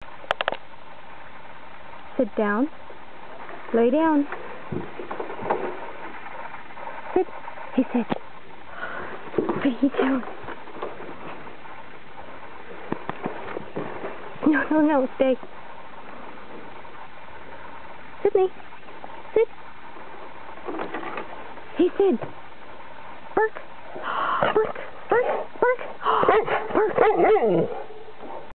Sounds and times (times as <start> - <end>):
Yip: 26.1 - 27.6.